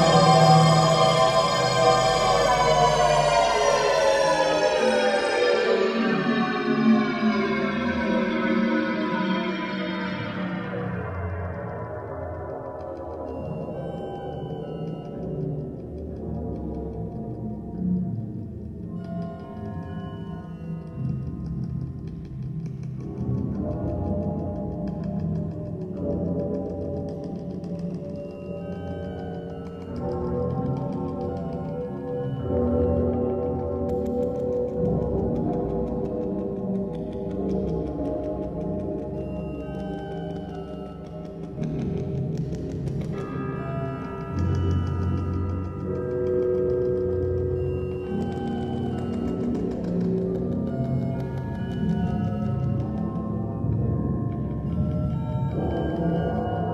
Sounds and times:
Theremin: 0.0 - 56.7.

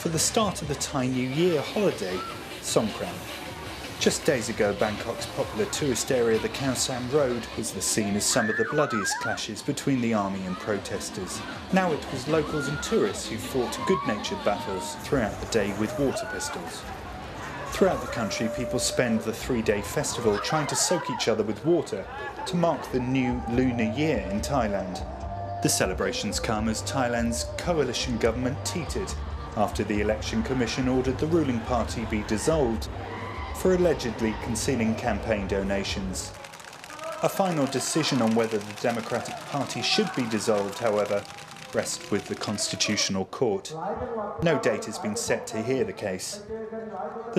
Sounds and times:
Speech: 0.0 - 3.2, 4.0 - 16.9, 17.7 - 25.0, 25.6 - 32.9, 33.6 - 47.3.

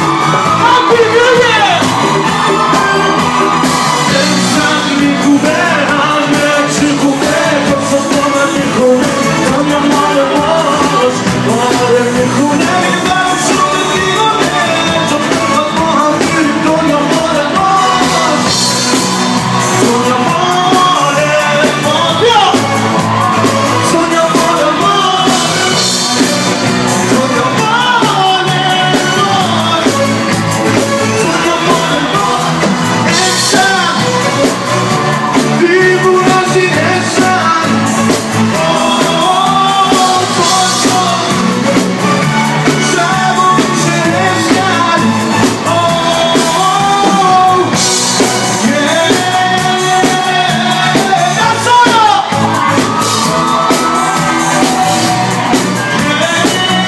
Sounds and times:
Music: 0.0 - 56.8.

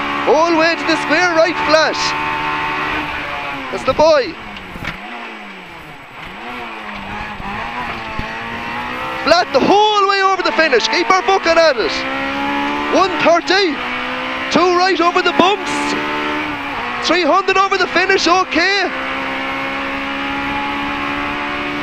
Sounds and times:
Car: 0.0 - 21.8.

